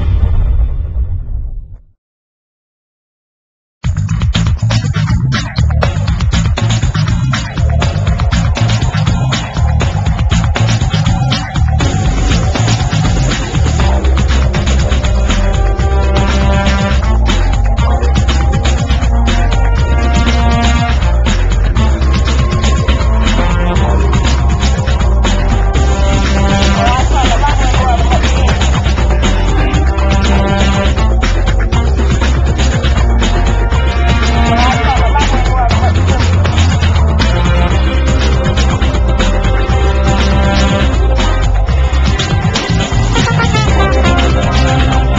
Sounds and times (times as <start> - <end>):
Music: 3.8 - 45.1.